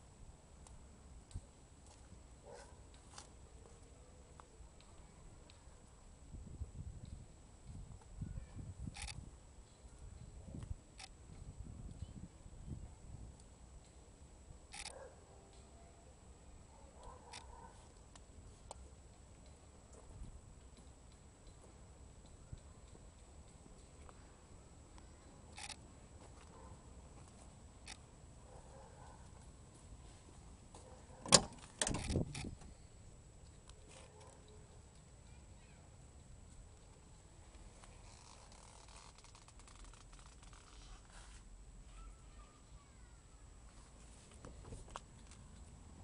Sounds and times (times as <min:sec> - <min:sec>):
Outside, urban or manmade: 0:00.0 - 0:46.0
Vehicle: 0:08.8 - 0:46.0.